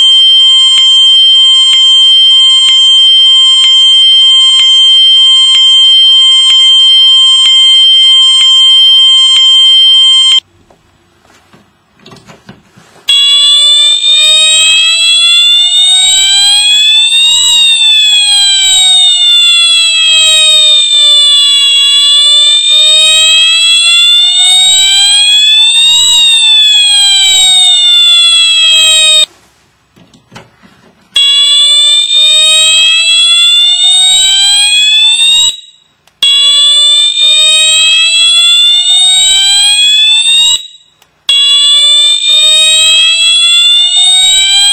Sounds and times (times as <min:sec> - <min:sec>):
Fire alarm: 0:00.0 - 0:10.5, 0:13.1 - 0:29.3, 0:31.2 - 0:44.7
Inside, small room: 0:00.0 - 0:44.7.